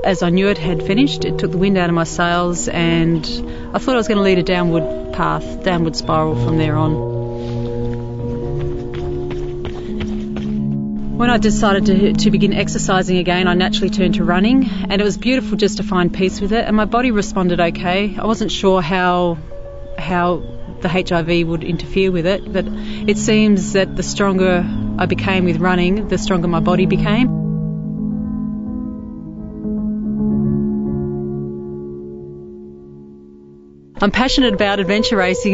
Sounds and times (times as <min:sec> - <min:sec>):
Speech: 0:00.0 - 0:07.0, 0:11.2 - 0:19.4, 0:20.0 - 0:27.3, 0:34.0 - 0:35.5
Music: 0:00.0 - 0:35.5.